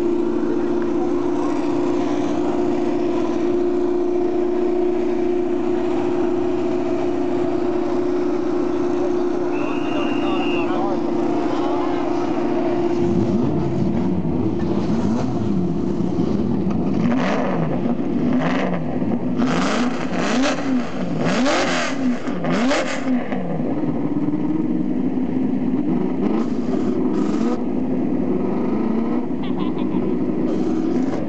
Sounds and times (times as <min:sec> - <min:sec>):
Heavy engine (low frequency): 0:00.0 - 0:31.2
Vehicle: 0:00.0 - 0:31.2
Accelerating, revving, vroom: 0:16.9 - 0:23.5, 0:25.9 - 0:27.6.